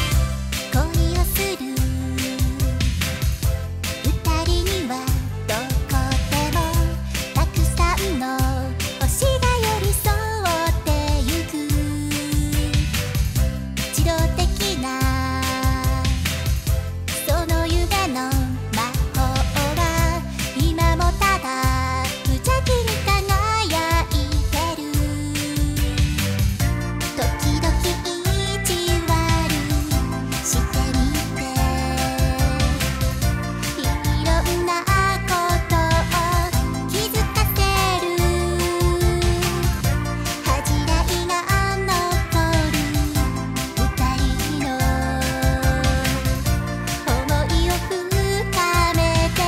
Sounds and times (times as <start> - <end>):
Music: 0.0 - 49.4.